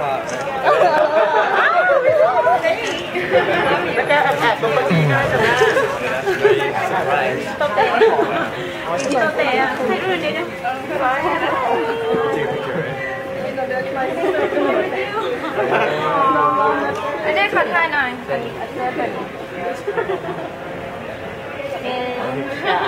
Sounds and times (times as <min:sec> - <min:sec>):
Chatter: 0:00.0 - 0:22.8.